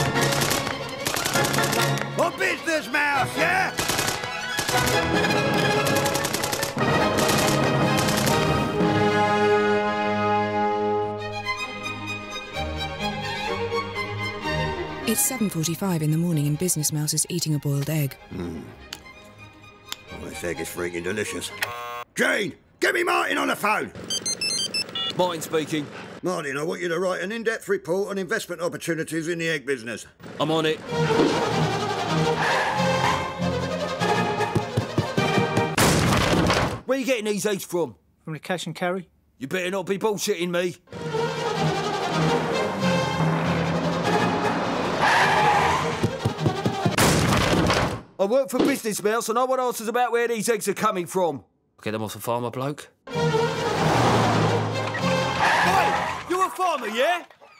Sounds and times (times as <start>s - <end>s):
Music: 0.0s - 22.0s, 30.4s - 35.8s, 40.9s - 47.0s, 53.1s - 56.5s
Speech: 15.1s - 18.5s, 36.9s - 40.8s, 56.3s - 57.3s.